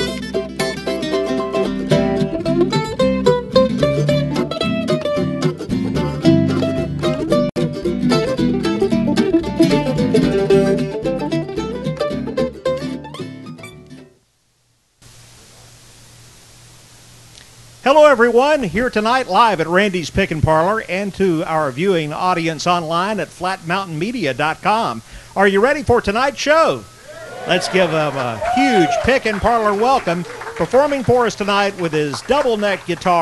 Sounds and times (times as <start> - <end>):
Mandolin: 0.0 - 14.0.